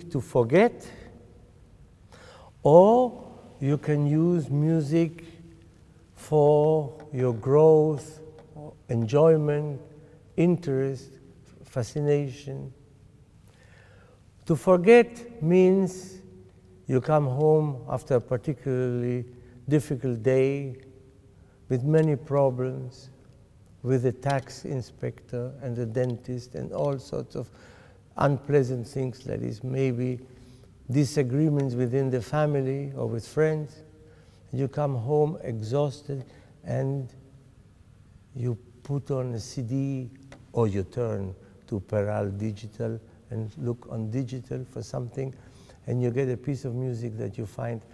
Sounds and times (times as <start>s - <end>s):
Speech: 0.0s - 1.2s, 2.6s - 5.3s, 6.2s - 12.8s, 14.4s - 16.3s, 16.9s - 20.8s, 21.7s - 23.2s, 23.8s - 27.5s, 28.2s - 30.3s, 30.9s - 33.9s, 34.5s - 37.2s, 38.3s - 47.9s.